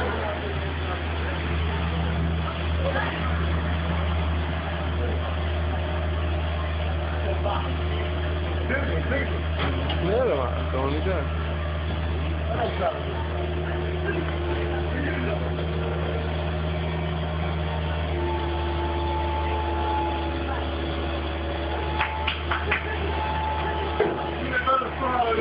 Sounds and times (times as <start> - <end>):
Truck: 0.0 - 25.4
Speech: 24.4 - 25.4.